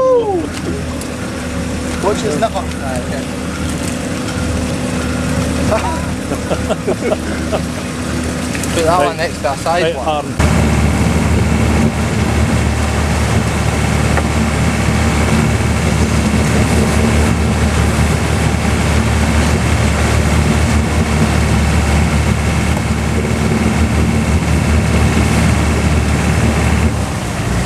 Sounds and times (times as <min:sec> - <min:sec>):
Speech: 0:08.7 - 0:10.4.